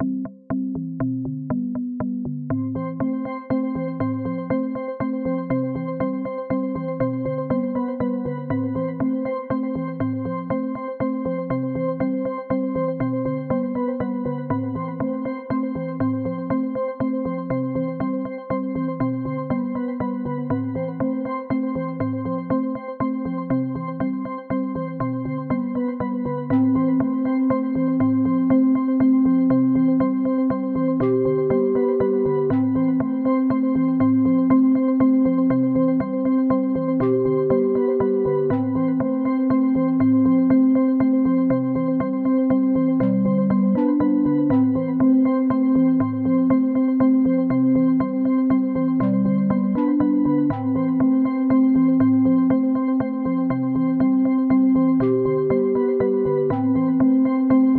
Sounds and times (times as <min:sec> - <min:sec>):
Music: 0:00.0 - 0:57.7.